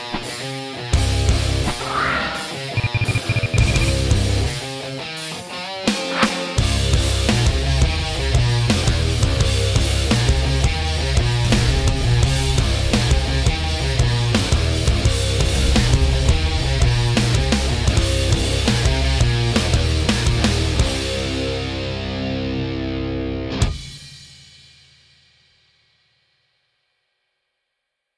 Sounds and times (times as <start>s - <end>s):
Music: 0.0s - 28.1s.